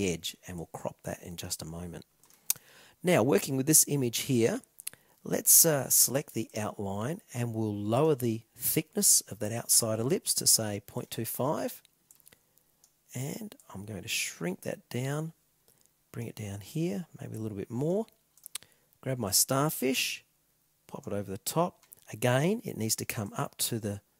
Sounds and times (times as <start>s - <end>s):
Speech: 0.0s - 2.0s, 3.0s - 11.8s, 13.1s - 15.4s, 16.1s - 18.1s, 19.0s - 20.3s, 20.9s - 24.1s
Inside, small room: 0.0s - 24.2s.